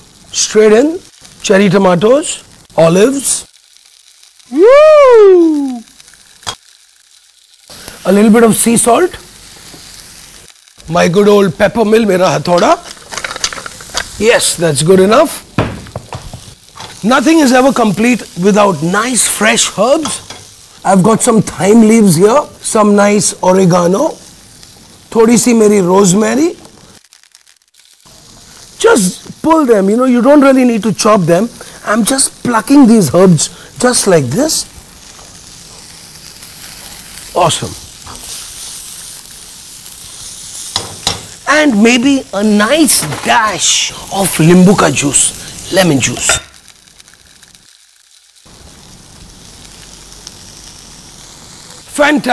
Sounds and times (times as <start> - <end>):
Sizzle: 0.0 - 52.3.